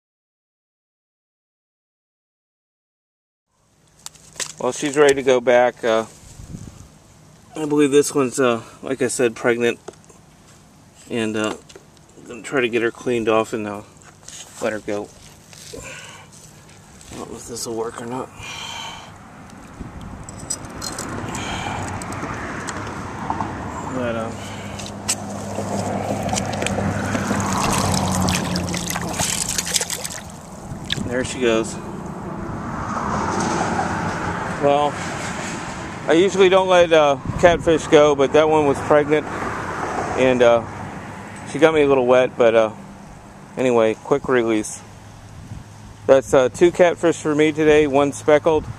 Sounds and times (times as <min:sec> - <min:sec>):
Speech: 0:04.6 - 0:06.2, 0:07.6 - 0:09.8, 0:11.1 - 0:11.6, 0:12.2 - 0:13.9, 0:14.6 - 0:15.2, 0:17.1 - 0:18.4, 0:23.9 - 0:24.4, 0:31.0 - 0:31.8, 0:34.6 - 0:35.0, 0:36.1 - 0:39.3, 0:40.2 - 0:40.7, 0:41.5 - 0:42.8, 0:43.6 - 0:44.9, 0:46.1 - 0:48.7.